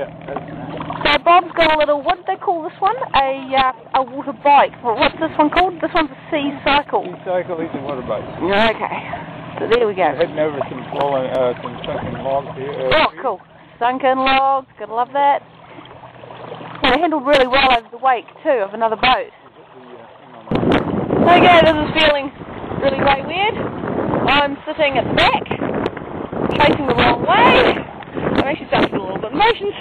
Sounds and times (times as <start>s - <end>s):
Stream: 0.0s - 29.8s.